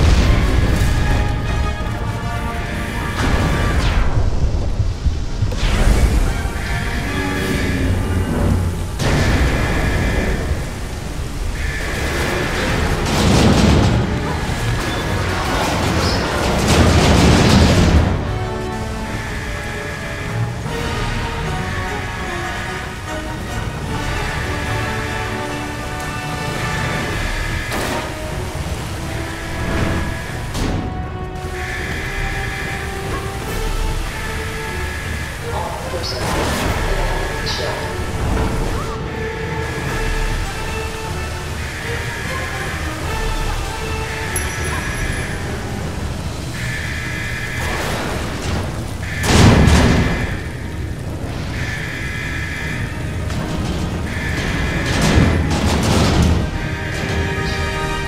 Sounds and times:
Sailboat, sailing ship: 0.0s - 58.0s.

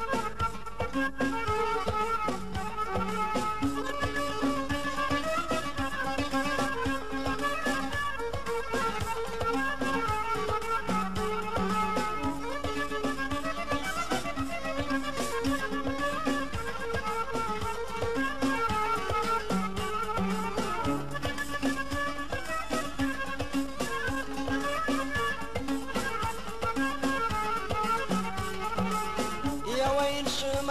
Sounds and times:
Music: 0.0s - 30.7s.

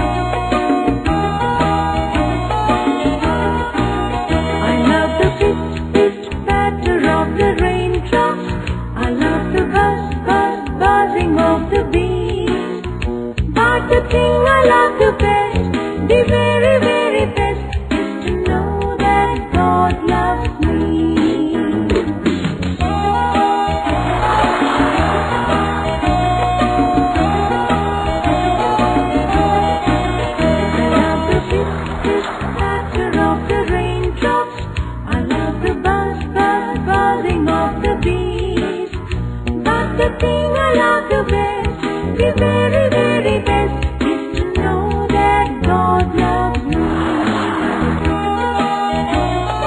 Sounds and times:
Music for children: 0.0s - 49.6s.

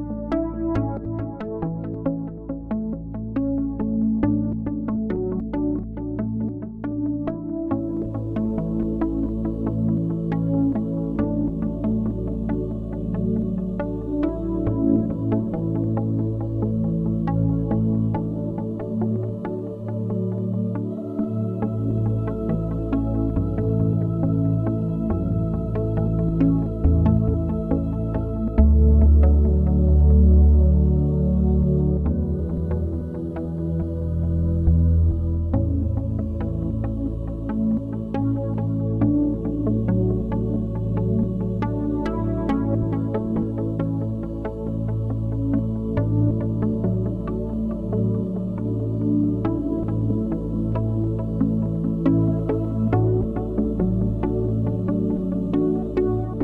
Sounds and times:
Music: 0.0s - 56.4s.

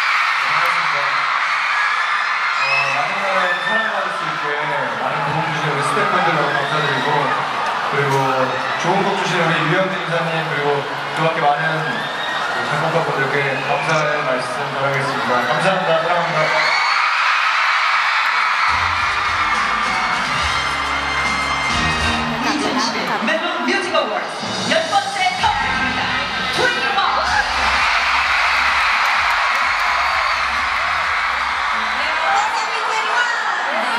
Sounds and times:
Speech: 2.6s - 12.0s, 12.6s - 16.7s.

